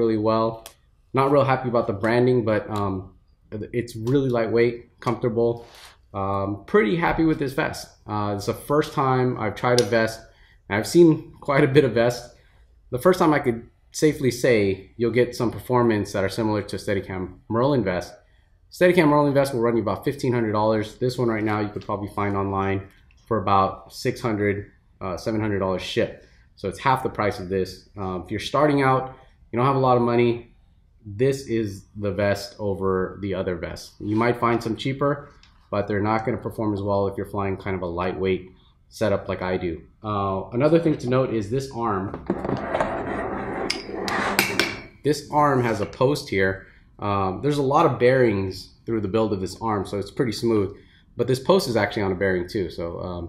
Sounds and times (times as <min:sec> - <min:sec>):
Speech: 0:00.0 - 0:42.2, 0:45.0 - 0:53.2.